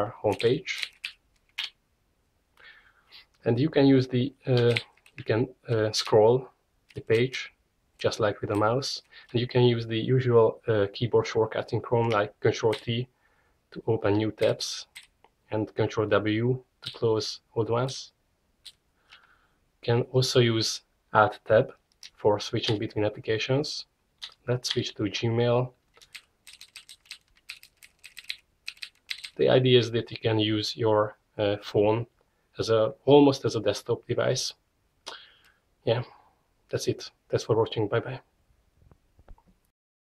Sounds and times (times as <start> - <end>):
Speech: 0.0 - 0.9, 3.4 - 13.1, 13.8 - 14.9, 15.5 - 18.2, 19.8 - 25.8, 29.4 - 34.6, 35.8 - 38.3.